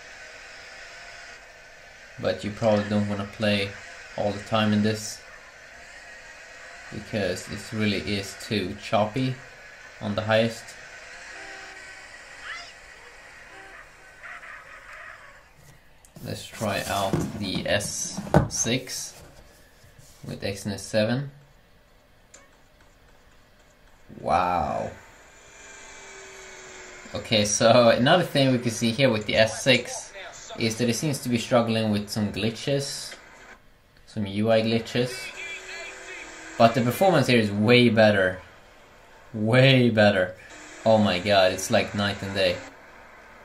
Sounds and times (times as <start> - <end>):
Speech: 2.2 - 5.2, 7.0 - 9.4, 10.0 - 10.8, 16.2 - 19.2, 20.2 - 21.4, 24.1 - 25.0, 27.1 - 33.2, 34.1 - 38.5, 39.4 - 42.7.